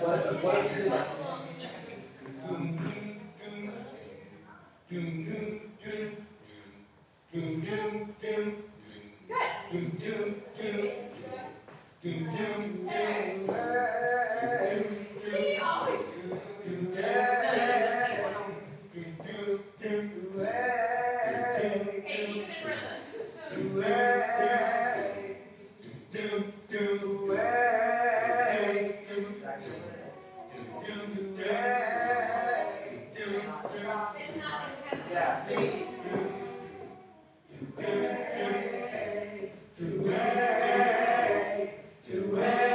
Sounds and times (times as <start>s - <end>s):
Male singing: 0.0s - 1.2s, 2.1s - 4.3s, 4.9s - 6.7s, 7.3s - 9.1s, 9.7s - 11.4s, 12.0s - 22.2s, 23.4s - 42.7s
Speech: 0.0s - 4.7s, 10.6s - 13.7s, 15.2s - 18.6s, 22.1s - 23.8s, 29.4s - 31.0s, 33.2s - 37.0s.